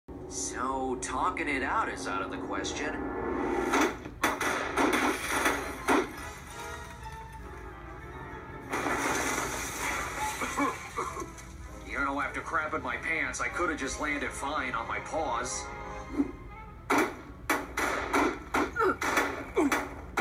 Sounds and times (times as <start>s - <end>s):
Music: 0.1s - 20.2s
Speech: 0.3s - 3.0s, 11.9s - 15.7s.